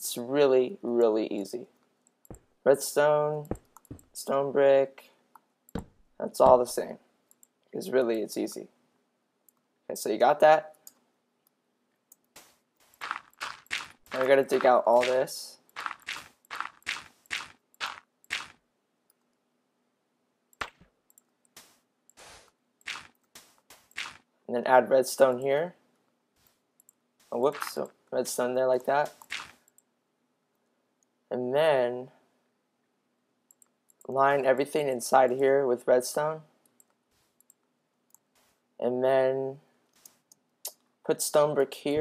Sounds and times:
Speech: 0.0s - 1.7s, 2.7s - 3.5s, 4.2s - 5.1s, 6.2s - 7.0s, 7.8s - 8.7s, 9.9s - 10.8s, 14.2s - 15.6s, 24.5s - 25.8s, 27.3s - 29.1s, 31.3s - 32.2s, 34.1s - 36.5s, 38.8s - 39.7s, 41.1s - 42.0s.

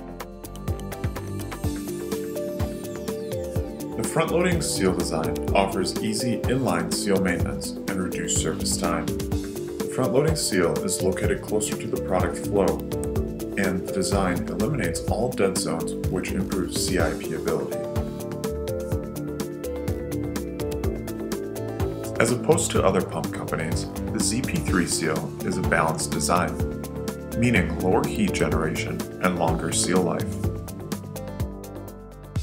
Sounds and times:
Music: 0.0s - 32.4s
Speech: 4.0s - 9.1s, 9.9s - 12.8s, 13.6s - 17.8s, 22.2s - 26.6s, 27.4s - 30.4s.

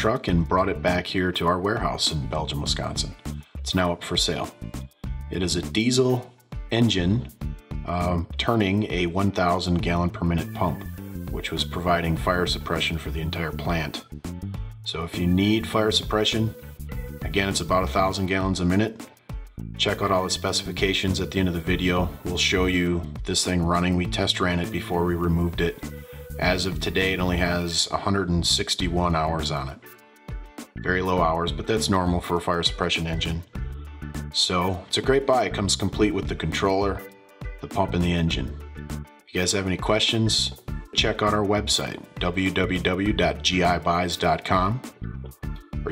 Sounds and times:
Speech: 0.0s - 4.6s, 5.3s - 14.0s, 14.9s - 16.6s, 17.2s - 19.0s, 19.8s - 29.9s, 30.8s - 33.5s, 34.3s - 38.6s, 39.3s - 44.9s
Music: 0.0s - 45.9s.

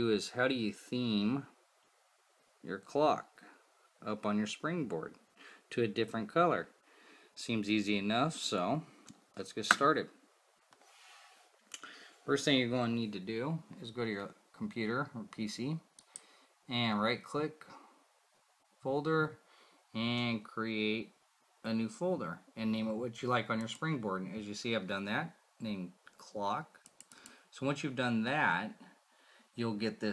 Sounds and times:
Speech: 0.0s - 1.6s, 2.6s - 6.8s, 7.4s - 10.2s, 12.3s - 15.9s, 16.7s - 17.8s, 18.8s - 26.8s, 27.5s - 28.9s, 29.6s - 30.1s.

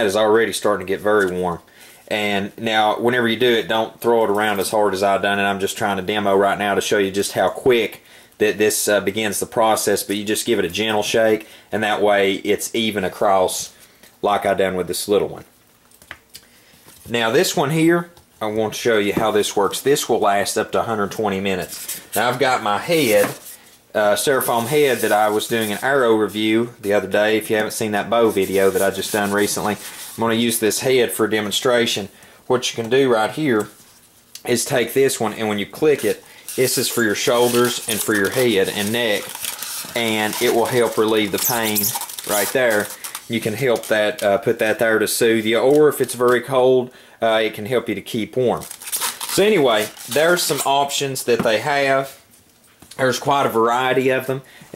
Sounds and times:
Speech: 0.0s - 15.5s, 17.1s - 33.8s, 34.4s - 48.7s, 49.3s - 52.2s, 53.0s - 54.7s.

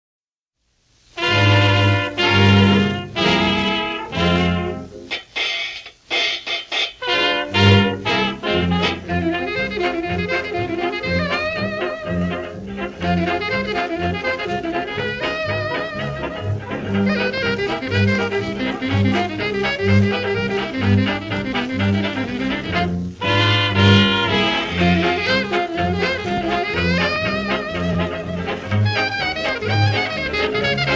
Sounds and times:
Orchestra: 1.0s - 5.1s, 7.0s - 30.9s
Jazz: 1.0s - 30.9s.

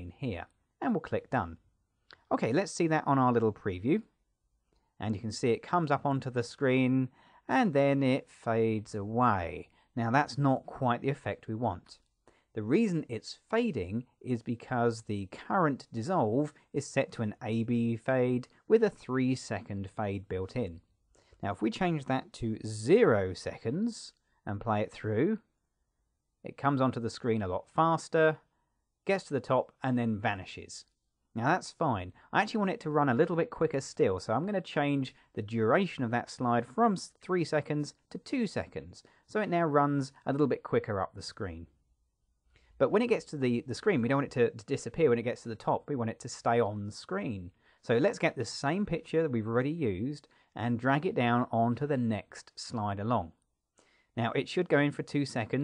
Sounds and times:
Narration, monologue: 0.0s - 55.6s.

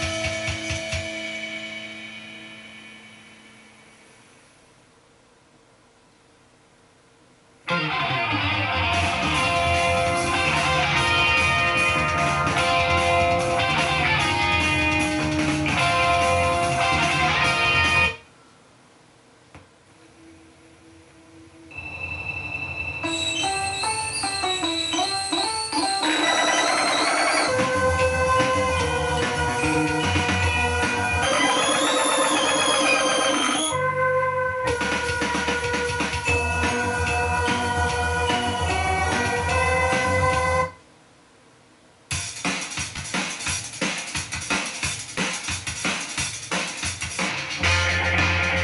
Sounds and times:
Music: 0.0s - 4.4s, 7.7s - 18.2s, 20.0s - 40.8s, 42.1s - 48.6s.

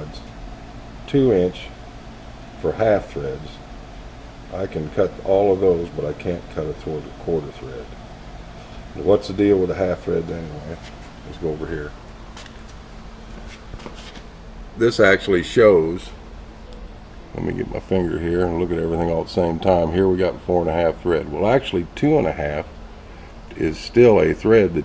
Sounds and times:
Speech: 0.0s - 0.4s, 1.1s - 1.8s, 2.6s - 3.6s, 4.5s - 8.0s, 8.9s - 12.0s, 14.8s - 16.2s, 17.3s - 22.7s, 23.5s - 24.8s.

